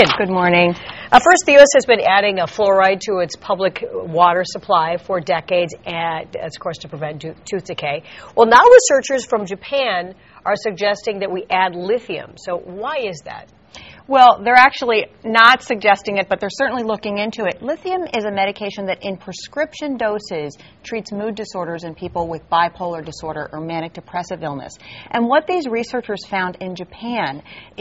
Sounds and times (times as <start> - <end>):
Speech: 0.0 - 13.5, 14.1 - 27.8.